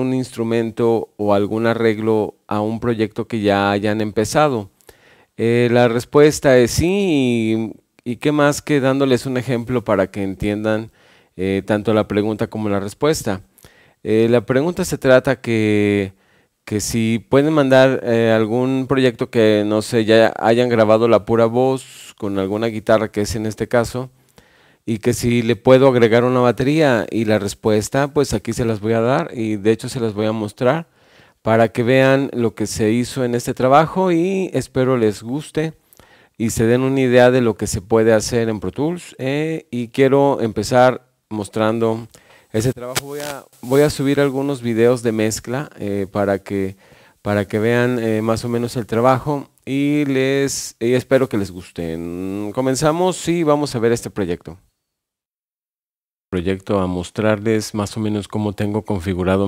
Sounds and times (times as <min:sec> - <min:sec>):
Speech: 0:00.0 - 0:04.7, 0:05.4 - 0:24.1, 0:24.9 - 0:30.9, 0:31.5 - 0:35.8, 0:36.4 - 0:54.6, 0:56.4 - 0:59.4.